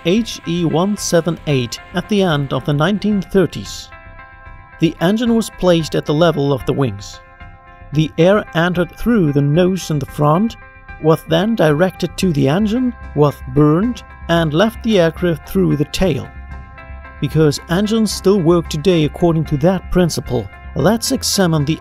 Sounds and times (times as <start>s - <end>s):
Speech: 0.0s - 3.9s, 4.8s - 7.2s, 8.0s - 16.3s, 17.2s - 21.8s.